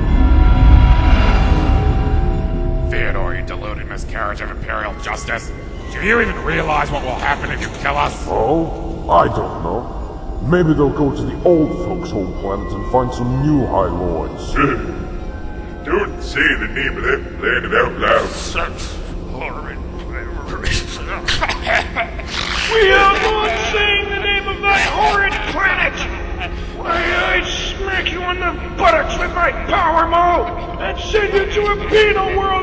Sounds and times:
Music: 0:00.0 - 0:32.6
Speech synthesizer: 0:02.9 - 0:15.0, 0:15.9 - 0:32.6.

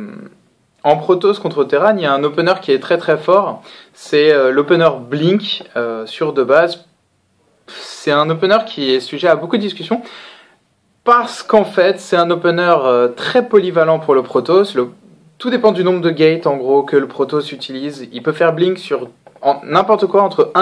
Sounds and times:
Speech: 0:00.0 - 0:06.9, 0:07.7 - 0:10.1, 0:11.0 - 0:20.6.

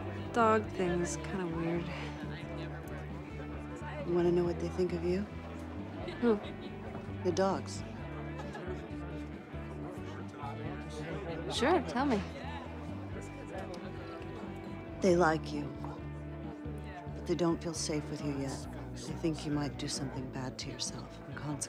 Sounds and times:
Music: 0:00.0 - 0:21.6.

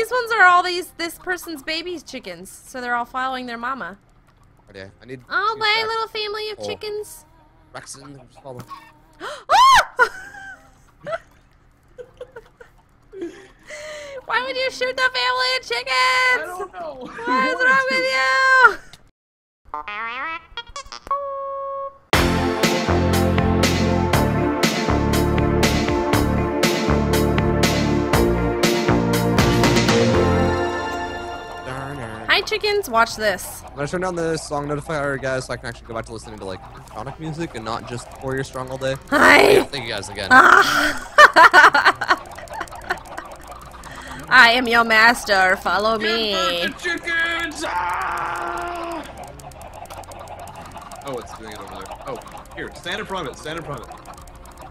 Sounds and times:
Music: 0:22.2 - 0:32.5.

